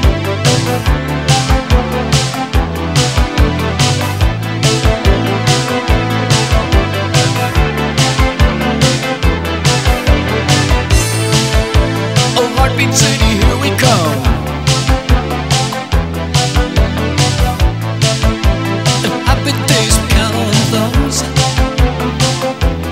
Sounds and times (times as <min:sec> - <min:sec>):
Music: 0:00.0 - 0:22.9.